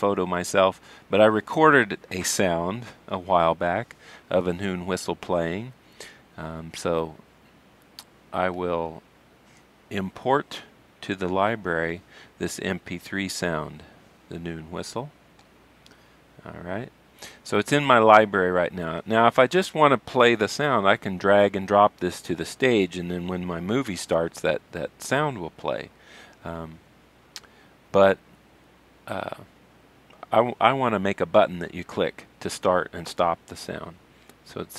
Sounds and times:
Speech: 0.0s - 5.8s, 6.4s - 7.2s, 8.3s - 9.0s, 9.9s - 15.1s, 16.4s - 26.8s, 27.9s - 28.2s, 29.1s - 29.5s, 30.2s - 34.7s.

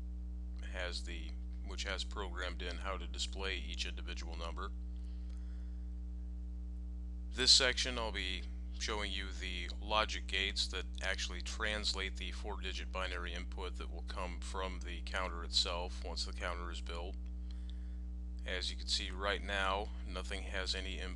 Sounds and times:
Speech: 0.6s - 4.7s, 7.4s - 17.2s, 18.5s - 21.1s.

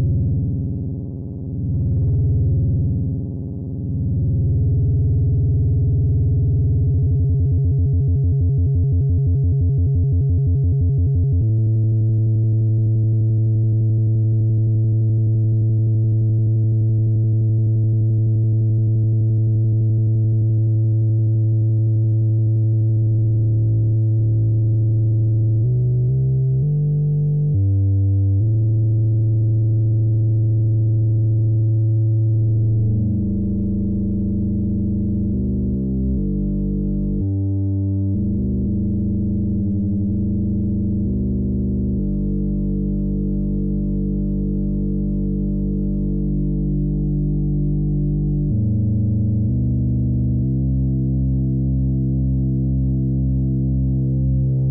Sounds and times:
Synthesizer: 0.0s - 54.7s.

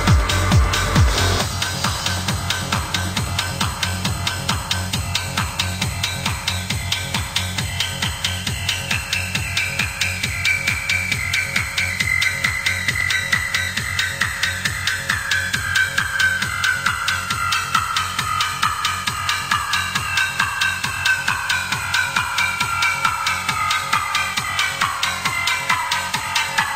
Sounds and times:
Techno: 0.0s - 26.7s.

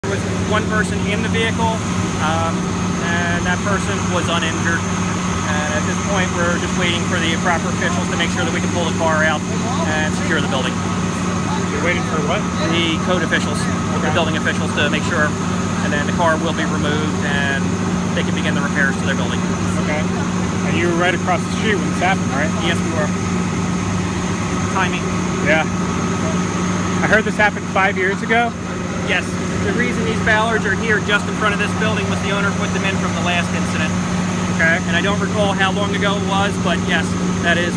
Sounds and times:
Speech: 0.0s - 10.8s, 11.5s - 23.2s, 24.7s - 25.7s, 27.0s - 28.5s, 29.1s - 34.0s, 34.6s - 37.7s
Motor vehicle (road): 0.0s - 37.7s.

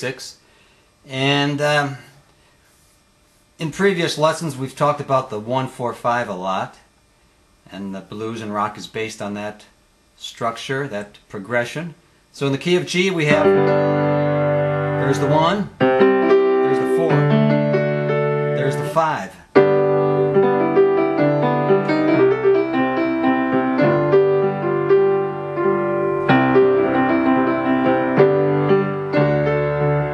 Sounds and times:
Speech: 0.0s - 0.4s, 1.1s - 2.1s, 3.6s - 6.9s, 7.7s - 13.5s, 15.0s - 15.8s, 16.6s - 17.3s, 18.6s - 19.5s
Music: 13.3s - 30.1s.

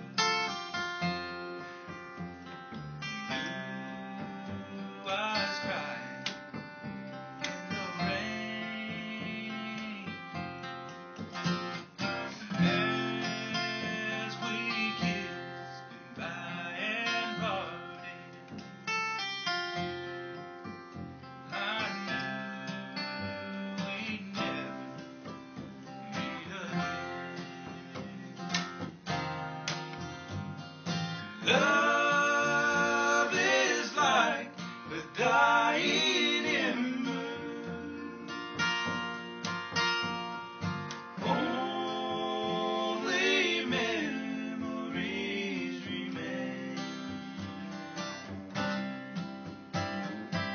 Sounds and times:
Music: 0.0s - 50.5s.

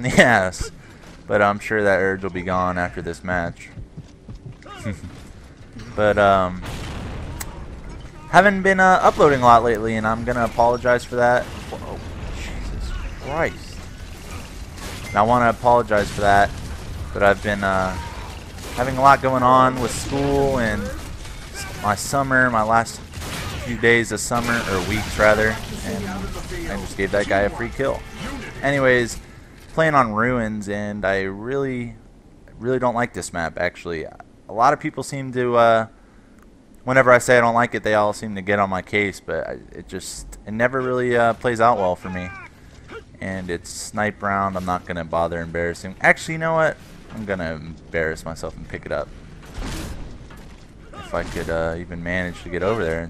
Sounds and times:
Speech: 1.3s - 3.8s, 8.2s - 13.8s, 15.1s - 16.5s, 18.8s - 21.0s, 21.6s - 23.0s, 23.6s - 29.2s, 32.6s - 35.9s, 36.9s - 42.5s, 43.2s - 49.1s, 51.0s - 53.0s.

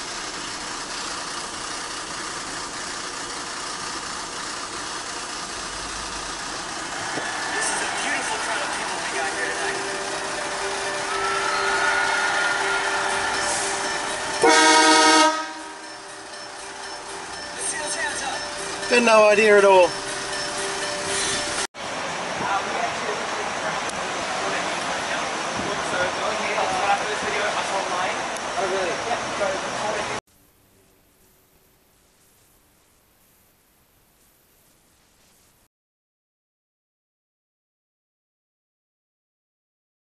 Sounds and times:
Music: 7.6s - 21.7s
Vehicle horn, car horn, honking: 14.4s - 15.9s
Speech: 17.6s - 19.9s, 22.4s - 30.2s.

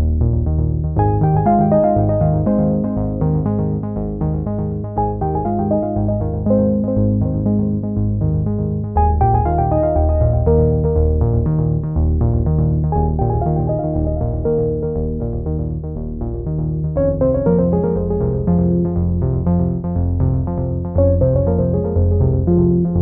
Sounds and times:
Music: 0.0s - 23.0s.

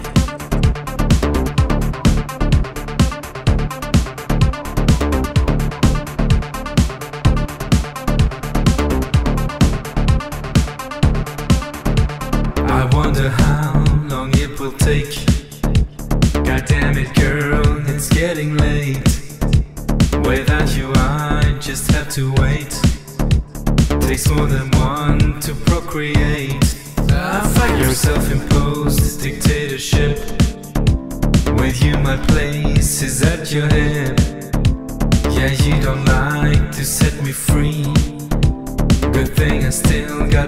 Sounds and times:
Electronica: 0.0s - 40.4s.

